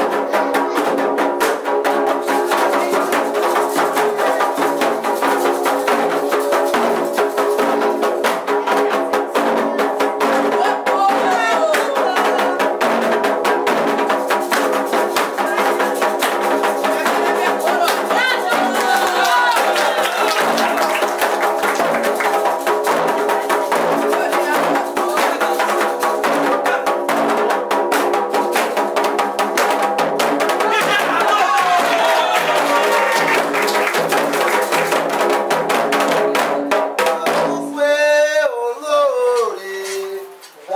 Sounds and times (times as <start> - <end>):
Music: 0.0 - 40.6.